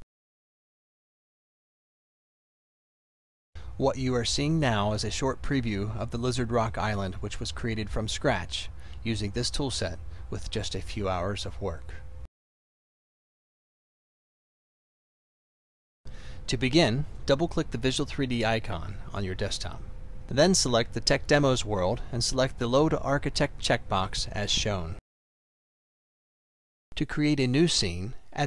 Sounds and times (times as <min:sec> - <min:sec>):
Speech: 0:03.8 - 0:12.0, 0:16.5 - 0:25.0, 0:27.0 - 0:28.4.